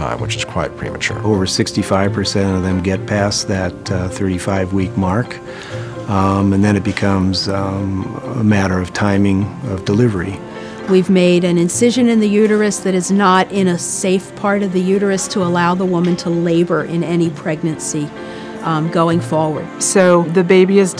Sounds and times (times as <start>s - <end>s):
Speech: 0.0s - 5.4s, 6.1s - 18.1s
Music: 0.0s - 20.9s.